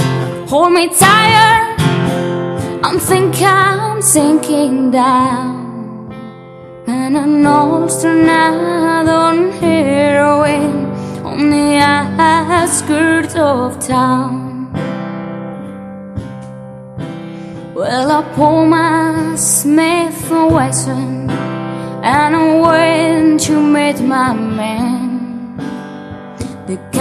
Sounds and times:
Music: 0.0s - 27.0s
Female singing: 0.5s - 1.8s, 2.8s - 6.2s, 6.9s - 14.8s, 17.8s - 25.6s, 26.5s - 27.0s.

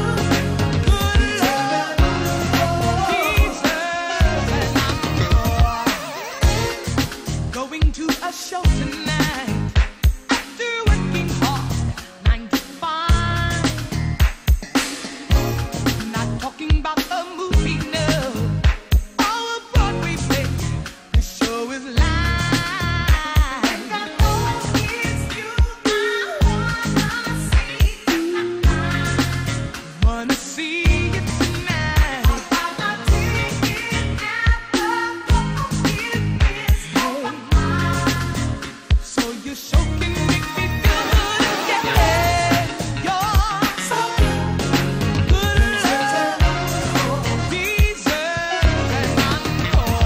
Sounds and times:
Music: 0.0s - 50.0s.

